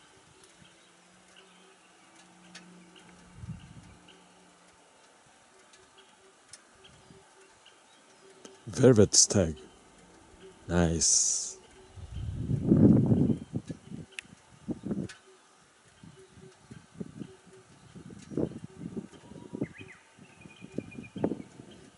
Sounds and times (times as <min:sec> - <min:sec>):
Outside, rural or natural: 0:00.0 - 0:21.9
Speech: 0:08.7 - 0:09.6, 0:10.7 - 0:11.6.